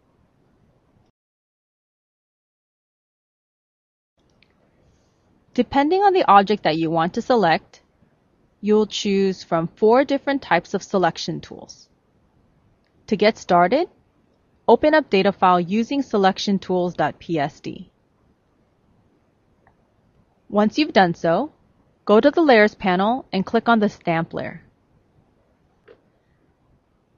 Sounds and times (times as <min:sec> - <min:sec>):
Speech: 0:05.6 - 0:07.8, 0:08.6 - 0:11.8, 0:13.1 - 0:13.9, 0:14.7 - 0:17.8, 0:20.5 - 0:21.5, 0:22.1 - 0:24.6.